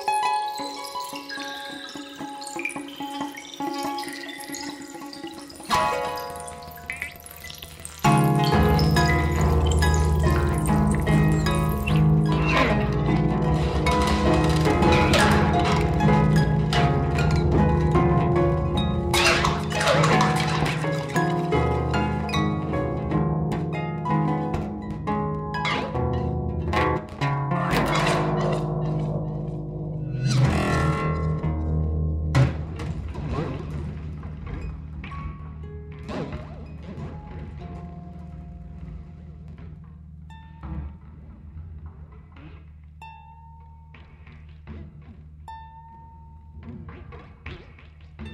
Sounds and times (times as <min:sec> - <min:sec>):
Harp: 0:00.0 - 0:48.3
Plucked string instrument: 0:00.0 - 0:48.3.